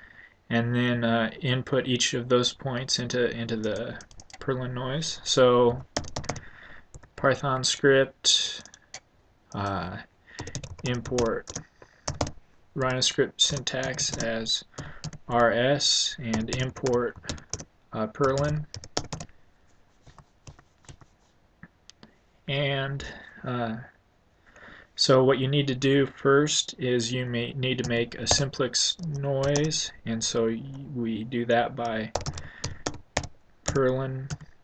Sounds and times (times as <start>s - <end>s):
Speech: 0.5s - 5.8s, 7.2s - 8.6s, 9.5s - 10.1s, 10.8s - 11.5s, 12.8s - 14.7s, 15.3s - 17.2s, 18.0s - 18.7s, 22.5s - 24.0s, 25.0s - 32.2s, 33.7s - 34.4s.